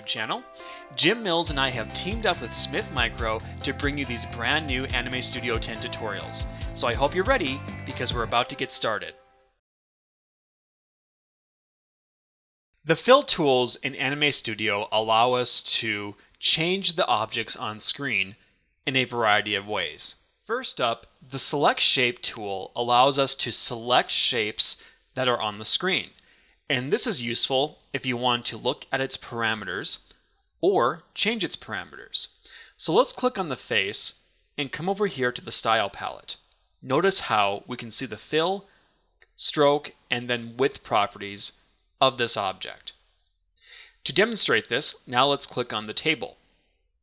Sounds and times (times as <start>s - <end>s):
Speech: 0.0s - 9.2s, 12.9s - 38.7s, 39.4s - 43.0s, 44.0s - 46.4s.